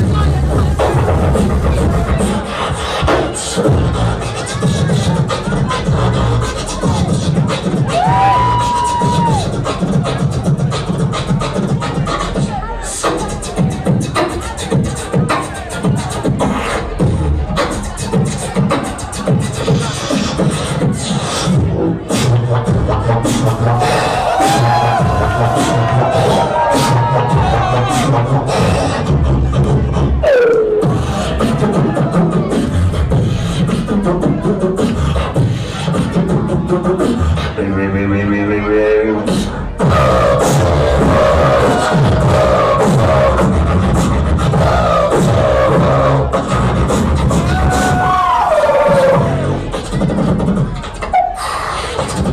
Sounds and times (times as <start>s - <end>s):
Beatboxing: 0.0s - 52.3s.